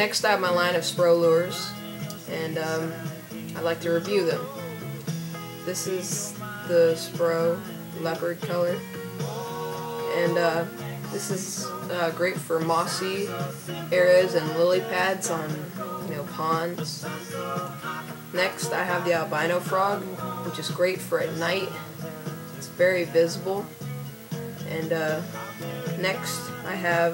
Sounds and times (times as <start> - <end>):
Speech: 0.0 - 1.7, 2.3 - 3.0, 3.6 - 4.5, 5.7 - 8.8, 10.0 - 13.4, 14.0 - 17.1, 18.4 - 21.8, 22.6 - 23.7, 24.7 - 25.2, 26.0 - 27.1
Music: 0.0 - 27.1.